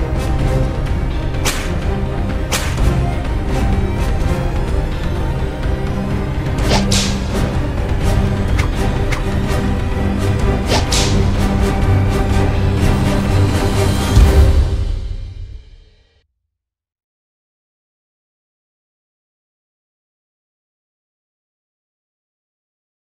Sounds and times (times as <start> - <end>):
Music: 0.0 - 16.5.